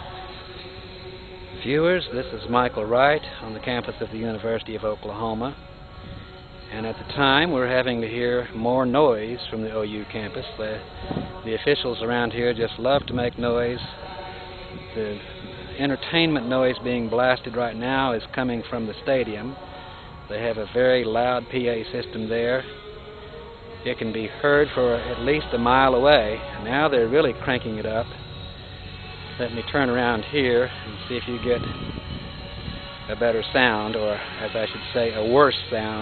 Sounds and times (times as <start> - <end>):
Music: 0.0 - 36.0
Speech: 1.6 - 5.6, 6.7 - 10.8, 11.5 - 14.0, 15.0 - 15.2, 15.8 - 19.6, 20.3 - 22.7, 23.9 - 28.1, 29.4 - 31.7, 33.1 - 36.0.